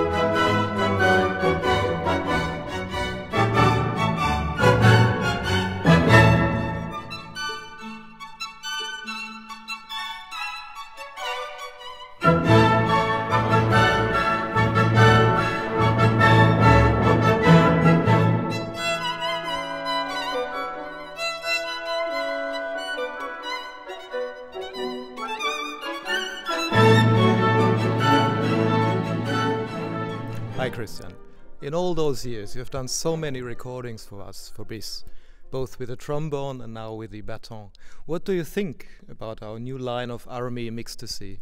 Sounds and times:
Violin, fiddle: 0:00.0 - 0:31.2.

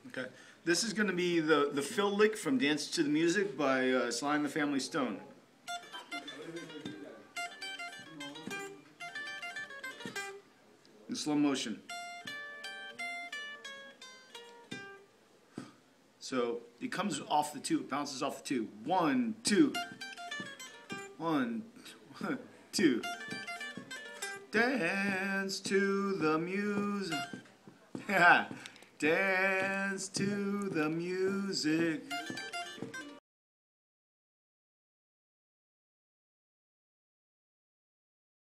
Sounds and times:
Guitar: 0:00.8 - 0:15.8, 0:16.5 - 0:33.2.

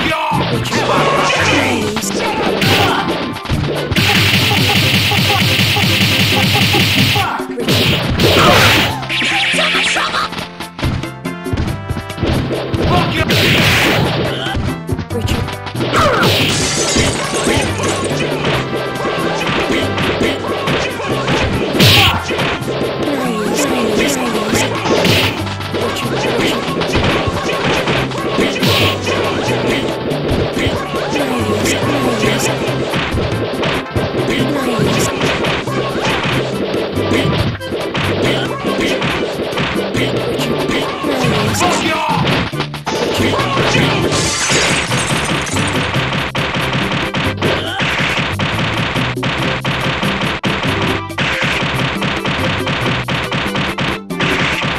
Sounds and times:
Music: 0:00.0 - 0:54.7
Sound effect: 0:00.0 - 0:54.7.

